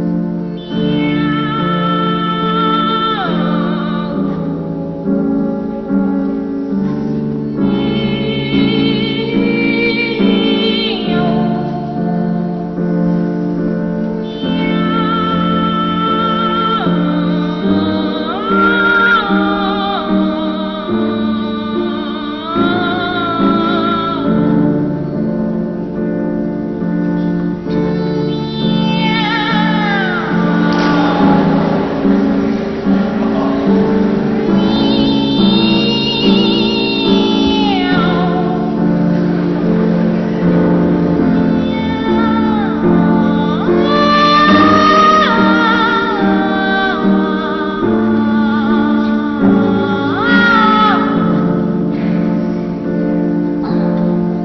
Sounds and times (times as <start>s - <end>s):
Music: 0.0s - 54.4s.